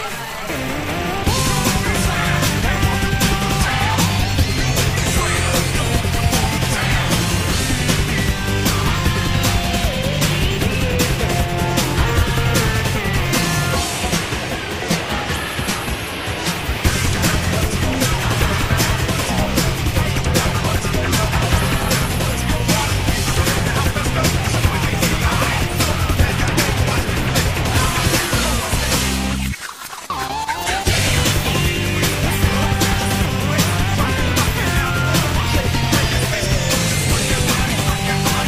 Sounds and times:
Music: 0.0 - 38.4.

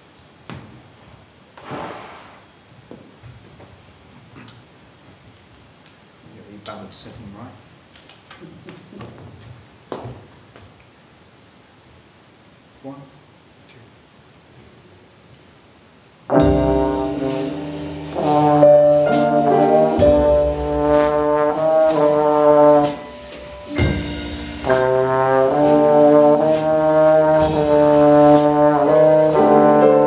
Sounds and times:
Inside, large room or hall: 0.0 - 11.4, 12.7 - 30.0
Jazz: 16.3 - 30.0.

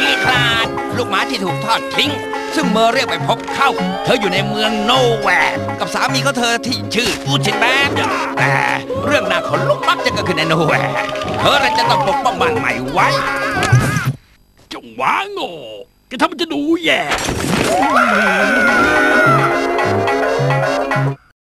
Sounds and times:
Speech: 0.0 - 13.6, 14.7 - 17.2
Music: 0.0 - 13.7, 17.7 - 21.3.

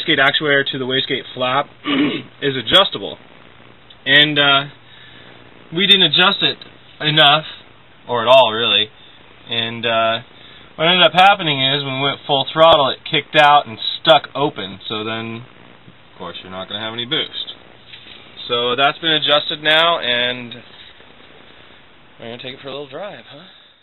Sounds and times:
Speech: 0.0 - 1.7, 2.4 - 3.2, 4.0 - 4.8, 5.7 - 15.5, 16.2 - 17.6, 18.4 - 20.7, 22.2 - 23.6.

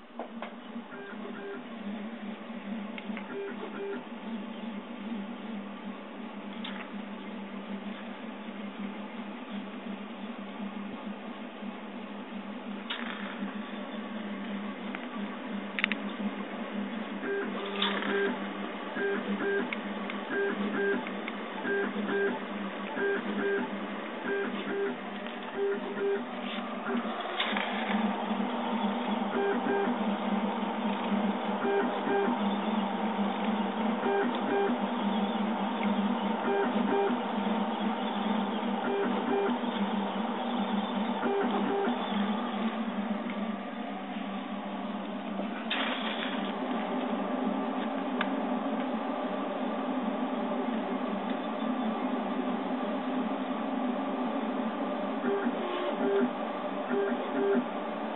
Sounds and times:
Printer: 0.0 - 8.7, 12.8 - 58.1.

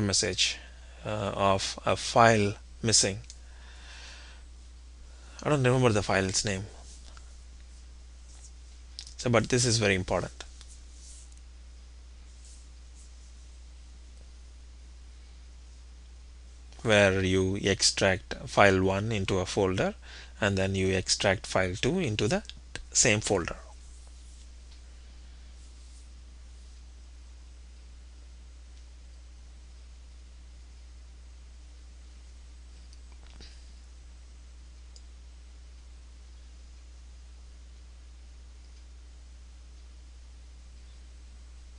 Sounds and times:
Speech: 0.0 - 3.3, 5.4 - 6.8, 9.0 - 10.5, 16.8 - 23.8.

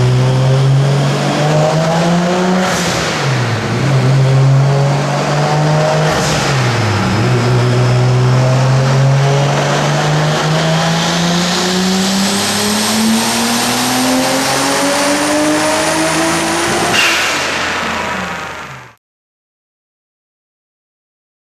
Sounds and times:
Accelerating, revving, vroom: 0.0 - 18.5
Car: 0.0 - 19.0.

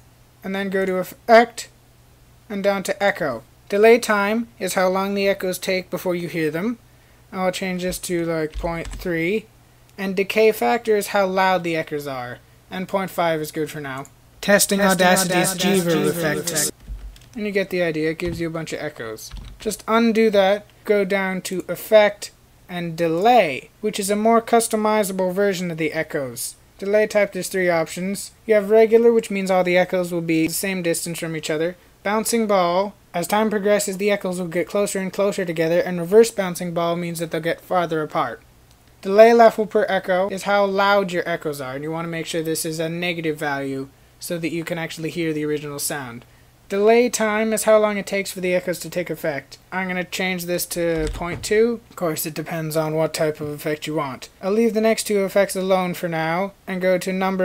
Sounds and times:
Speech: 0.4 - 1.8, 2.5 - 16.8, 17.4 - 38.4, 39.0 - 57.4.

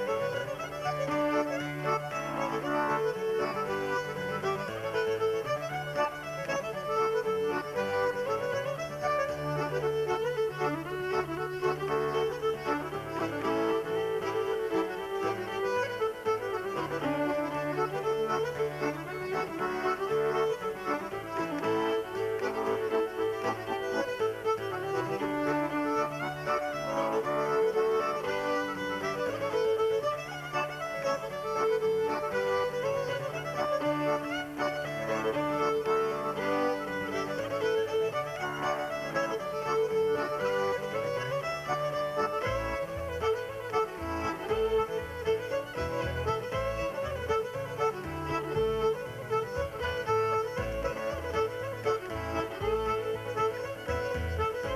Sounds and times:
Traditional music: 0.0 - 54.7.

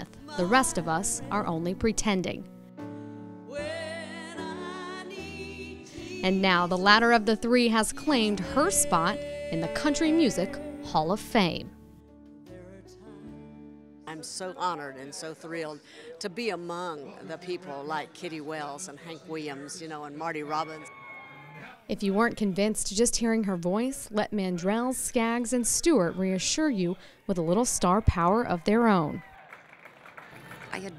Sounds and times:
Speech: 21.9 - 29.2.

